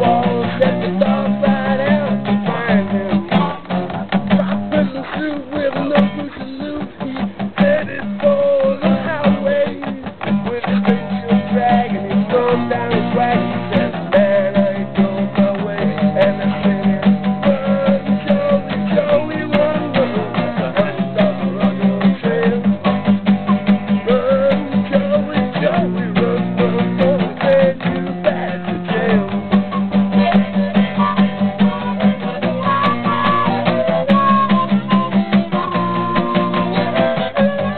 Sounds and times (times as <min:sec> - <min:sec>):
Music: 0:00.0 - 0:37.7.